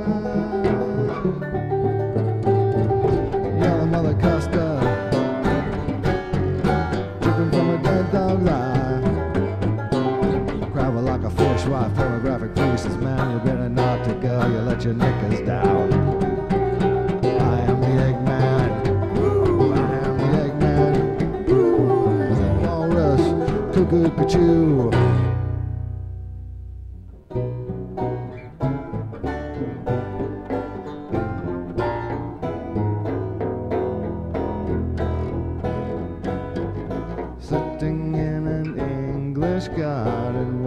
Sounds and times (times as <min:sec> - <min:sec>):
Banjo: 0:00.0 - 0:40.6
Folk music: 0:00.0 - 0:40.6.